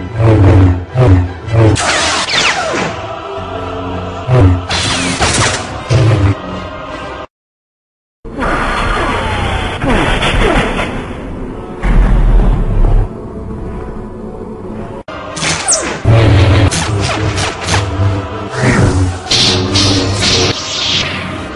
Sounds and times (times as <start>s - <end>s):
Music: 0.0s - 7.3s, 8.3s - 21.5s.